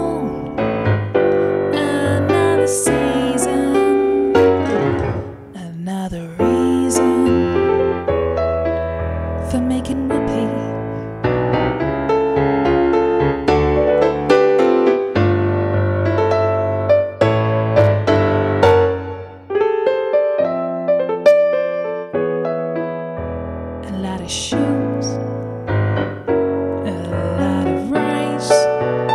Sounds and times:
Electric piano: 0:00.0 - 0:29.1.

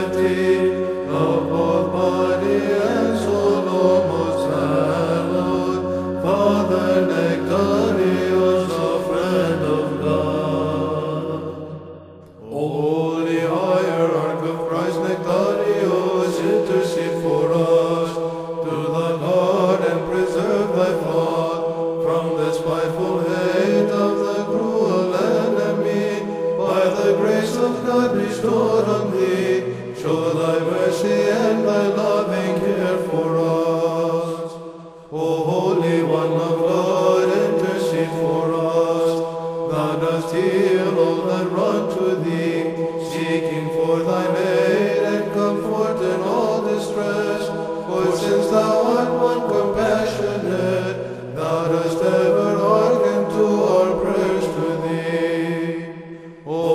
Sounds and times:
Chant: 0:00.0 - 0:56.7.

